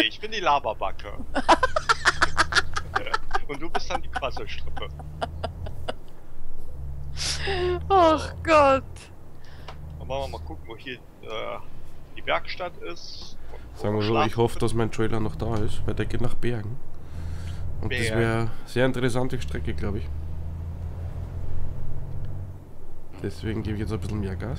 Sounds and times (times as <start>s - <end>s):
Speech: 0.0s - 1.2s, 2.8s - 5.5s, 7.2s - 9.0s, 10.0s - 11.6s, 12.2s - 16.8s, 17.8s - 20.1s, 23.2s - 24.5s
Vehicle: 0.0s - 24.5s.